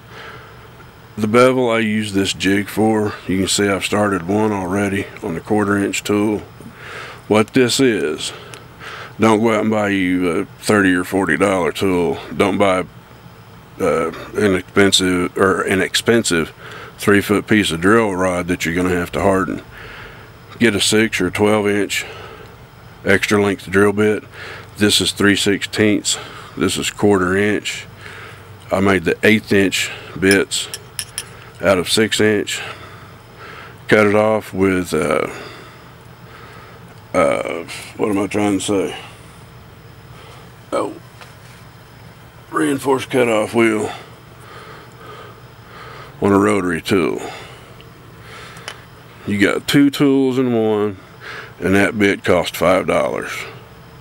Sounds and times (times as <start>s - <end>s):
Speech: 1.2s - 6.5s, 7.3s - 8.4s, 9.2s - 12.9s, 13.8s - 19.7s, 20.6s - 22.2s, 23.0s - 27.9s, 28.7s - 30.7s, 31.6s - 32.7s, 33.9s - 35.4s, 37.1s - 39.1s, 40.7s - 41.0s, 42.5s - 44.0s, 46.2s - 47.4s, 49.2s - 51.0s, 51.6s - 53.6s.